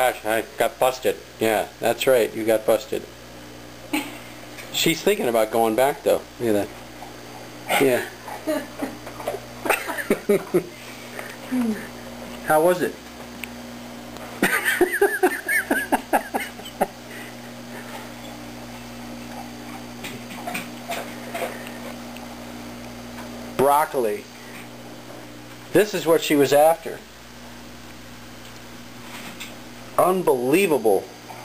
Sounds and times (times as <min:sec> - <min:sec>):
Speech: 0:00.0 - 0:03.1, 0:04.7 - 0:06.7, 0:07.7 - 0:08.1, 0:12.5 - 0:13.0, 0:23.6 - 0:24.3, 0:25.7 - 0:27.1, 0:30.0 - 0:31.1.